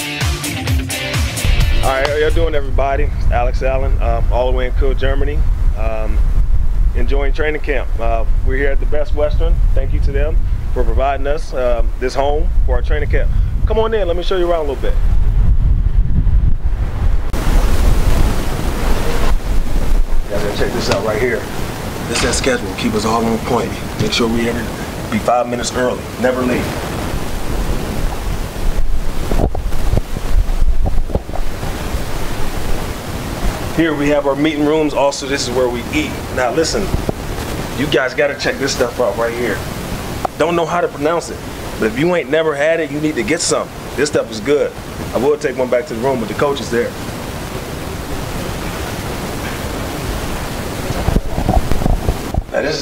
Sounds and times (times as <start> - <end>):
Speech: 1.8 - 6.2, 7.0 - 15.0, 20.3 - 21.5, 22.1 - 26.7, 33.8 - 37.0, 37.8 - 39.6, 40.4 - 47.0, 52.5 - 52.8.